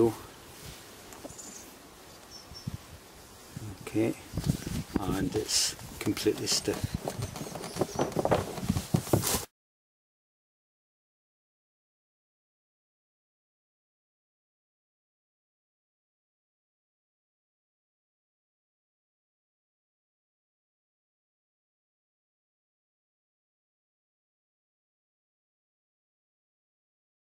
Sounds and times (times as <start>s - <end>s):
Speech: 0.0s - 0.2s, 3.6s - 4.2s, 5.0s - 7.0s
Outside, urban or manmade: 0.0s - 9.5s.